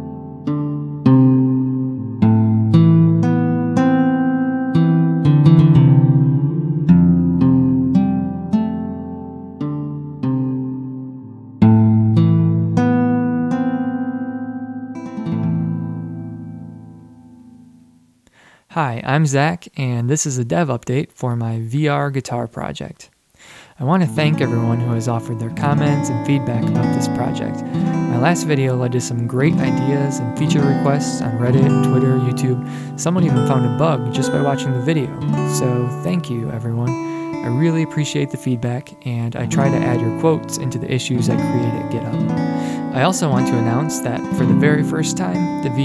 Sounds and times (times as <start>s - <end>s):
Speech: 18.7s - 23.1s, 23.8s - 42.2s, 42.9s - 45.8s
Musical instrument: 23.9s - 45.8s.